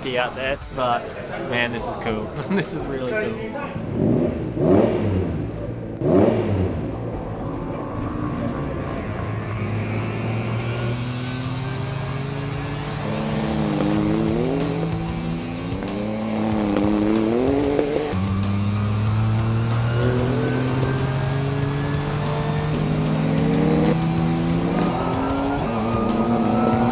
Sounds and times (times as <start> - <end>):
Music: 0.0 - 3.9, 11.0 - 26.9
Race car, auto racing: 3.1 - 26.9.